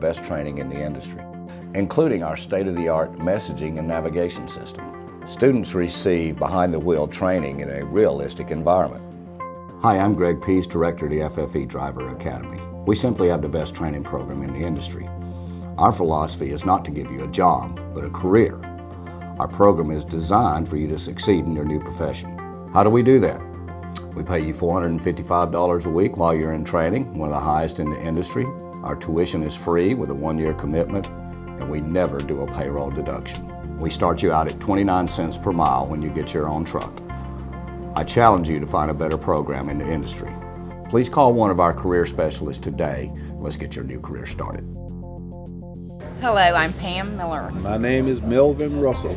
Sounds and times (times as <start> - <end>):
Speech: 0.0 - 9.0, 9.8 - 15.1, 15.8 - 18.6, 19.4 - 23.4, 24.0 - 31.0, 31.6 - 37.0, 38.0 - 40.3, 40.9 - 44.6, 46.2 - 49.1
Music: 0.0 - 49.1.